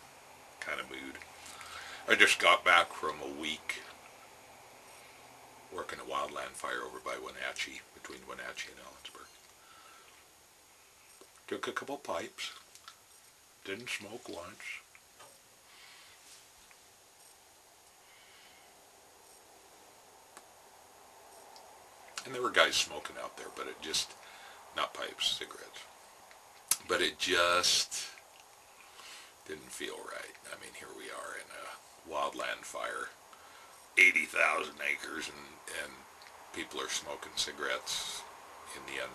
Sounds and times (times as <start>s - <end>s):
Speech: 0.6s - 1.2s, 2.0s - 4.0s, 5.7s - 9.4s, 11.5s - 12.6s, 13.6s - 14.9s, 22.2s - 24.2s, 24.8s - 25.9s, 26.7s - 28.2s, 29.4s - 33.2s, 34.0s - 39.1s.